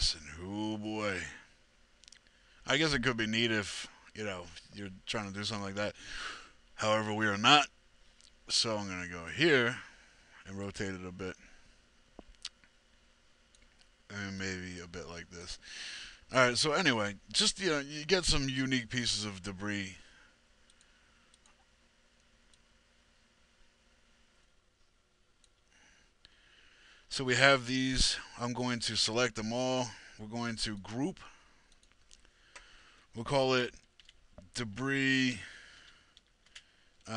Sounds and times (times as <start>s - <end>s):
Speech: 0.0s - 1.5s, 2.6s - 6.0s, 6.8s - 7.7s, 8.5s - 11.5s, 14.1s - 15.6s, 16.3s - 20.1s, 27.1s - 31.3s, 33.2s - 33.8s, 34.4s - 35.6s.